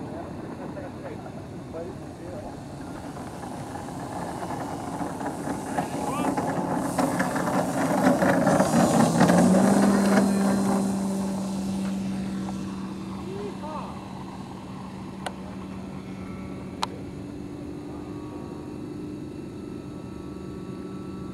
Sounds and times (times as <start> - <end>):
Fixed-wing aircraft, airplane: 0.0 - 21.3
Propeller, airscrew: 0.0 - 21.3
Speech: 13.3 - 14.0.